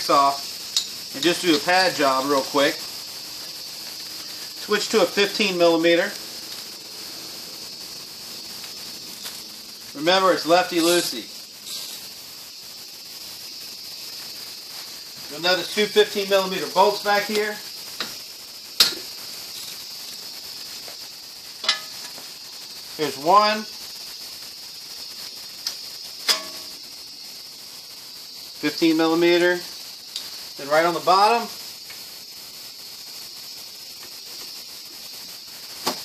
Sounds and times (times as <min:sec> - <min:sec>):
Speech: 0:00.0 - 0:00.4, 0:01.1 - 0:02.8, 0:04.6 - 0:06.2, 0:10.0 - 0:11.3, 0:15.3 - 0:17.6, 0:23.0 - 0:23.7, 0:28.6 - 0:29.7, 0:30.6 - 0:31.5.